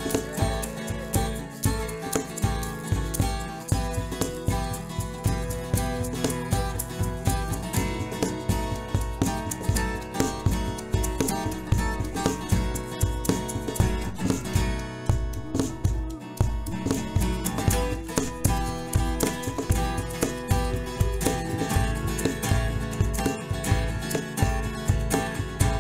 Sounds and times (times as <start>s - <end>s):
Background music: 0.0s - 25.8s.